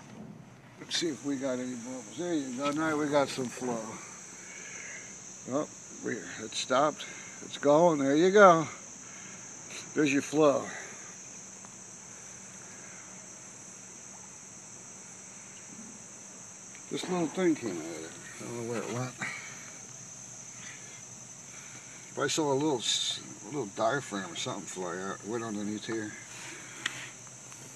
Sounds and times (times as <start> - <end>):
Speech: 0.8 - 4.0, 16.9 - 19.2, 22.2 - 26.2.